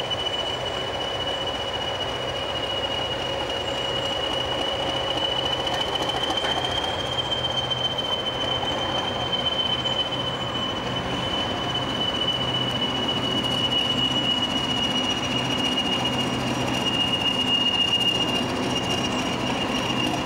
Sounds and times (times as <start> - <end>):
Train: 0.0 - 20.2.